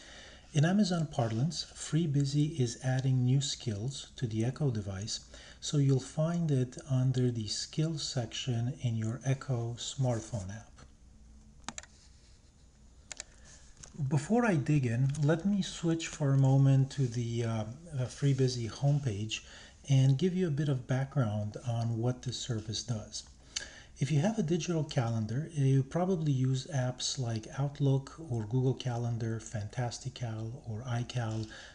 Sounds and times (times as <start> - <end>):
Speech: 0.6 - 10.8, 14.0 - 23.3, 24.0 - 31.6.